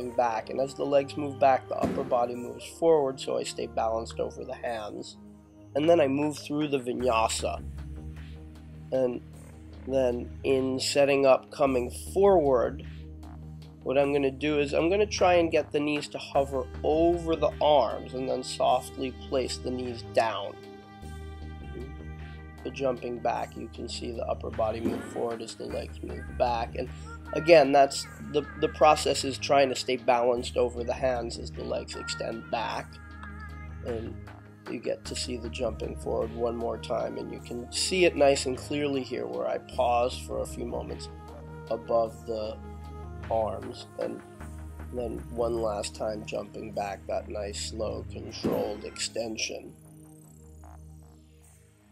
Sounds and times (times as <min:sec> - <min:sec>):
Speech: 0:00.0 - 0:05.2, 0:05.8 - 0:07.6, 0:09.0 - 0:09.2, 0:09.8 - 0:12.8, 0:13.9 - 0:20.6, 0:22.7 - 0:32.9, 0:33.9 - 0:41.1, 0:41.7 - 0:42.6, 0:43.3 - 0:44.2, 0:44.9 - 0:49.8
Music: 0:00.0 - 0:51.9.